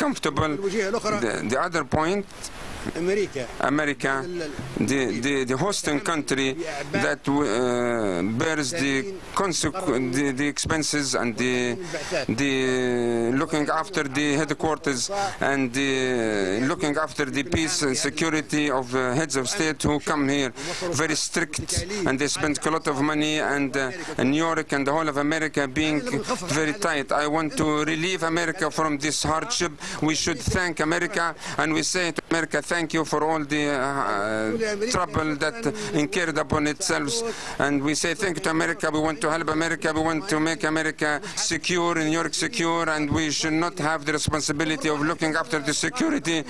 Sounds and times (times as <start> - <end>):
Male speech, man speaking: 0.0 - 2.3, 2.9 - 46.5
Narration, monologue: 0.0 - 46.5.